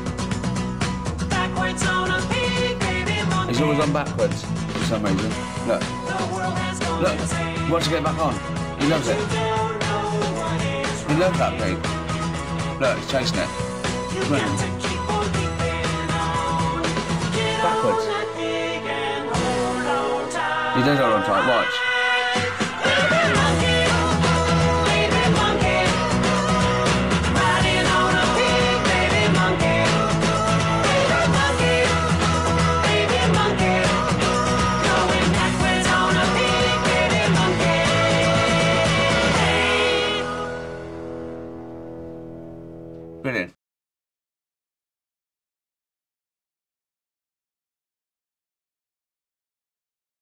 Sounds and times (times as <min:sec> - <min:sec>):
Music: 0:00.0 - 0:43.6
Speech: 0:03.5 - 0:06.0, 0:07.0 - 0:09.3, 0:11.1 - 0:11.8, 0:12.8 - 0:13.6, 0:14.2 - 0:14.7, 0:17.6 - 0:18.1, 0:20.8 - 0:21.8, 0:43.2 - 0:43.6.